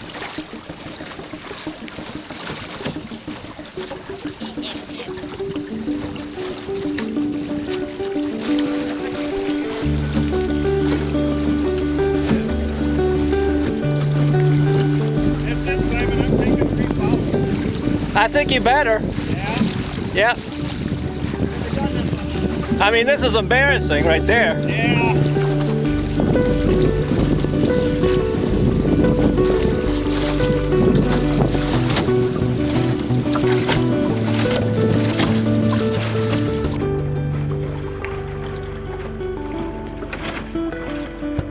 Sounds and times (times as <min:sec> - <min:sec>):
Boat, Water vehicle: 0:00.0 - 0:41.5
Music: 0:00.0 - 0:41.5.